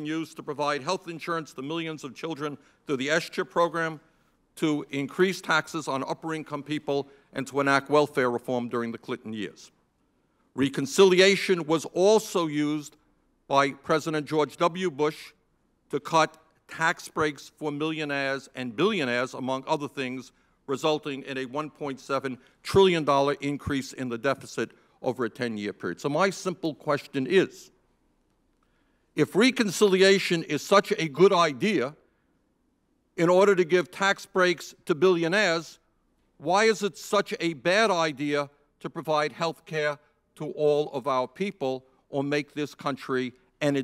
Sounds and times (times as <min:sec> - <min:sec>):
Speech: 0:00.0 - 0:04.0, 0:04.6 - 0:09.8, 0:10.6 - 0:27.8, 0:29.2 - 0:32.0, 0:33.2 - 0:35.8, 0:36.4 - 0:43.8.